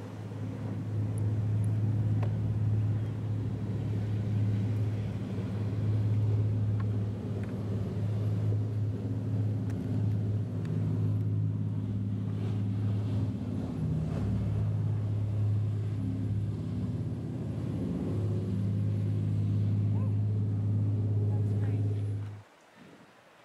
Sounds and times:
Outside, urban or manmade: 0.0s - 23.4s
Speech: 21.2s - 22.1s.

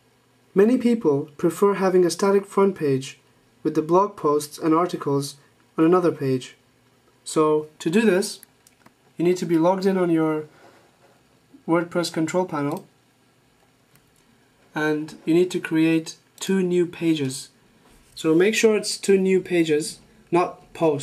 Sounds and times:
Speech: 0.5s - 6.6s, 7.2s - 8.5s, 9.2s - 10.6s, 11.6s - 12.9s, 14.7s - 17.6s, 18.2s - 21.0s.

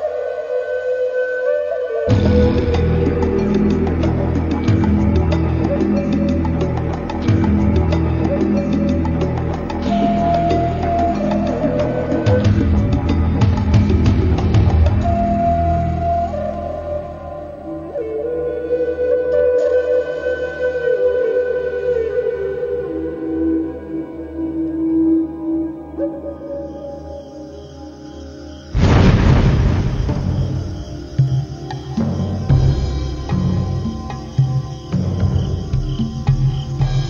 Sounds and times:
Music: 0.0s - 37.0s.

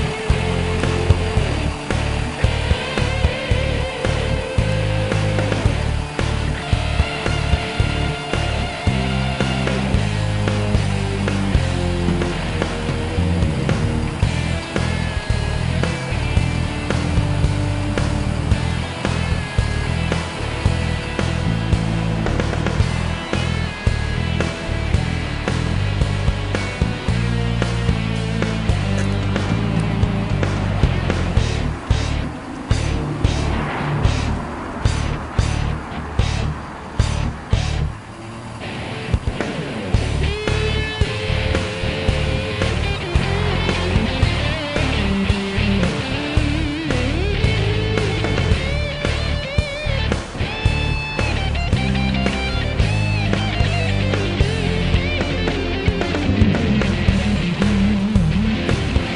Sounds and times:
Music: 0.0s - 59.1s.

